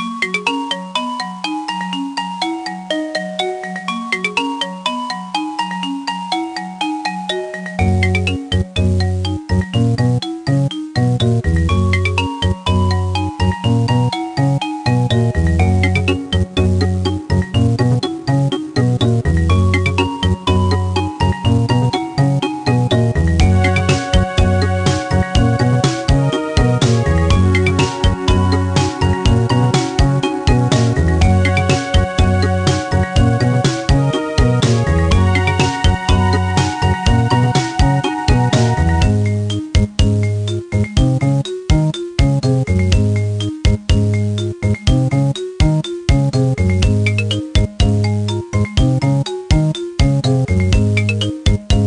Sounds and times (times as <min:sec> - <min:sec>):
Music: 0:00.0 - 0:51.8.